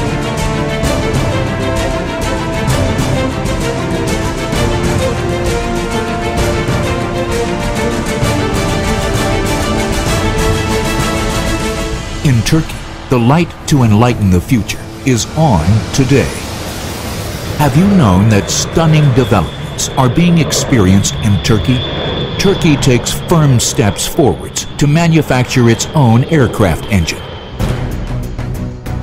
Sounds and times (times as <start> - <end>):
Music: 0.0 - 29.0
Speech: 12.2 - 16.4, 17.6 - 27.2.